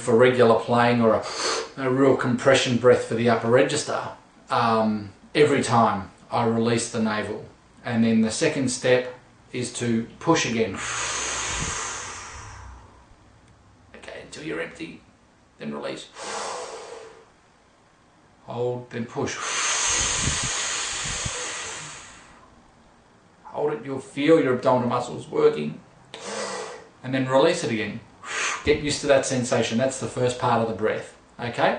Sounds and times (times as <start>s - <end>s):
Speech: 0.0s - 1.2s, 1.8s - 10.8s, 14.0s - 15.0s, 15.6s - 16.1s, 18.5s - 19.4s, 23.5s - 25.8s, 27.0s - 28.1s, 28.7s - 31.7s.